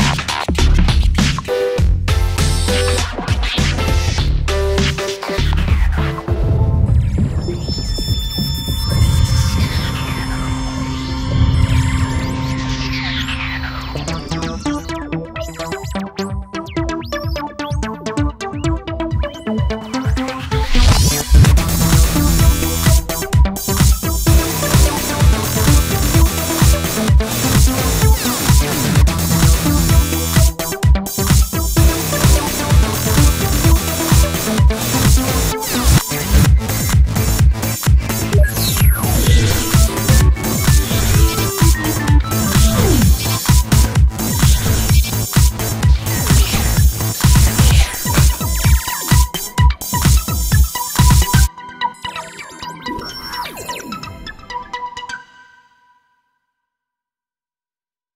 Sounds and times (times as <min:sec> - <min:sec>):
House music: 0:00.0 - 0:06.8, 0:09.6 - 0:51.8
Synthesizer: 0:00.0 - 0:56.0.